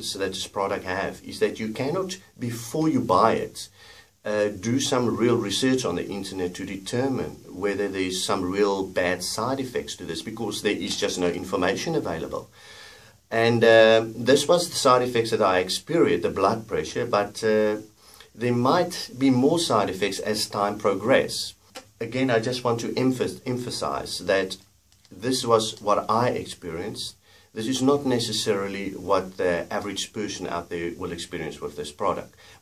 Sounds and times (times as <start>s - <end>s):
Speech: 0.0s - 12.5s, 13.3s - 32.6s.